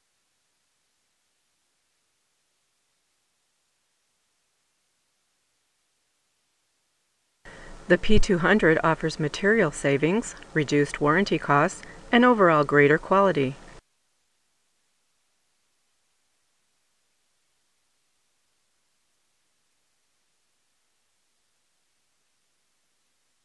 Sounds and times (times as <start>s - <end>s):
Speech: 7.9s - 13.6s.